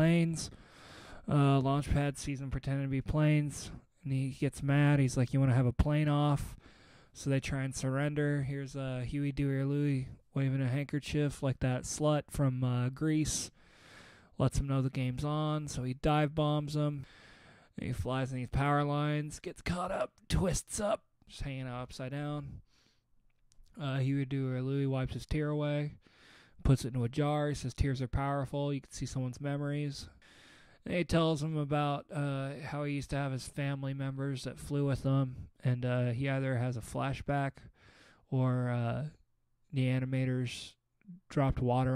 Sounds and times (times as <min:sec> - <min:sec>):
Speech: 0:00.0 - 0:00.5, 0:01.2 - 0:06.6, 0:07.2 - 0:13.6, 0:14.4 - 0:17.1, 0:17.8 - 0:22.6, 0:23.7 - 0:26.0, 0:26.6 - 0:30.2, 0:30.8 - 0:37.7, 0:38.3 - 0:41.9.